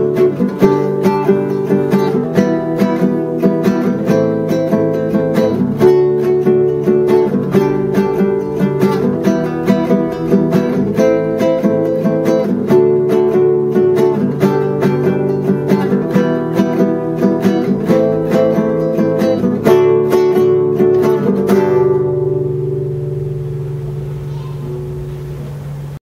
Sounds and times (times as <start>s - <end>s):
Music: 0.0s - 26.0s
Speech: 24.2s - 24.8s.